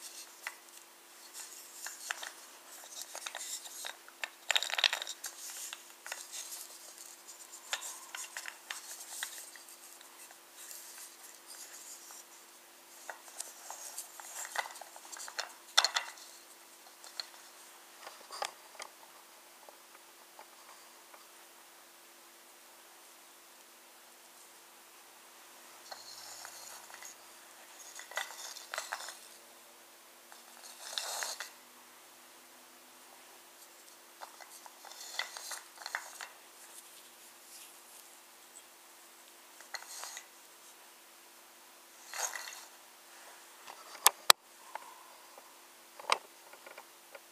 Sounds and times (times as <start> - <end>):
Inside, small room: 0.0 - 47.3.